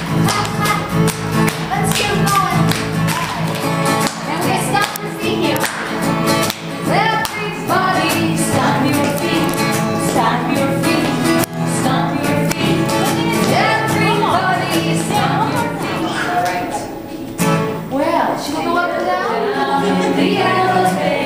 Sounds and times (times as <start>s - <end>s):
Music: 0.0s - 21.2s
Speech: 15.4s - 17.4s.